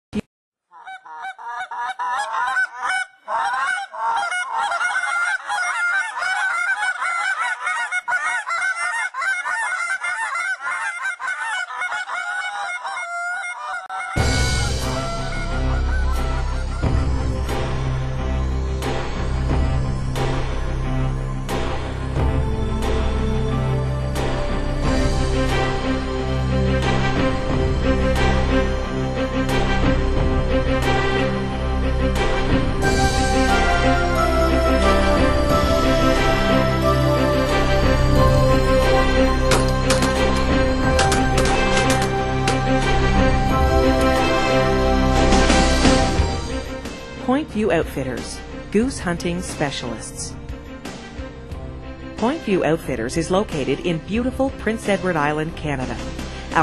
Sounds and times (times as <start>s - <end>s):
Honk: 0.8s - 14.2s.